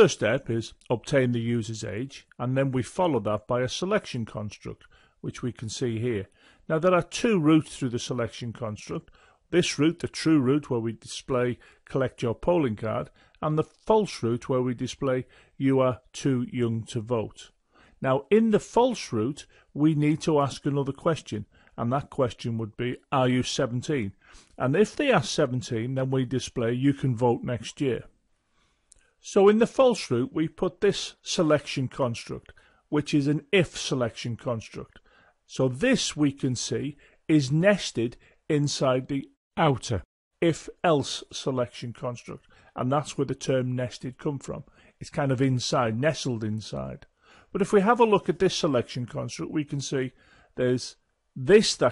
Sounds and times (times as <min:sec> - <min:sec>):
Speech: 0:00.0 - 0:28.1, 0:29.2 - 0:51.9.